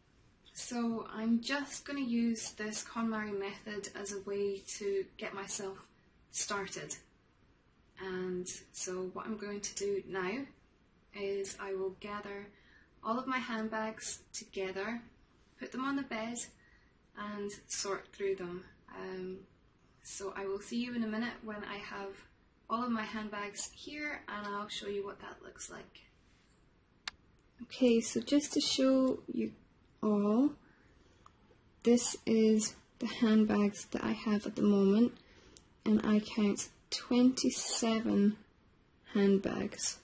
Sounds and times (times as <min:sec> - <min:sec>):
Speech: 0:00.5 - 0:07.1, 0:08.0 - 0:16.6, 0:17.2 - 0:26.0, 0:27.6 - 0:30.6, 0:31.8 - 0:35.2, 0:35.8 - 0:38.5, 0:39.1 - 0:40.0.